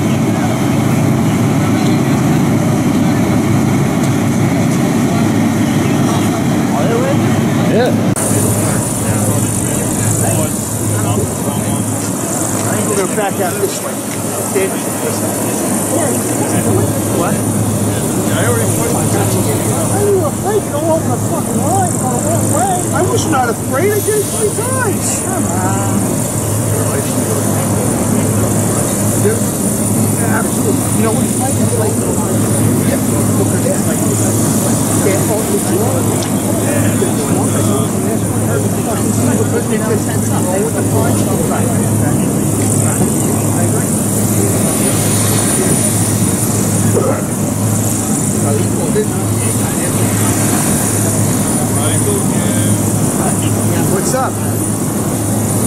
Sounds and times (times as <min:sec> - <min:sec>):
Hubbub, speech noise, speech babble: 0:00.0 - 0:55.6
Outside, urban or manmade: 0:00.0 - 0:55.6
Speech: 0:00.0 - 0:55.6
Vehicle: 0:00.0 - 0:55.6.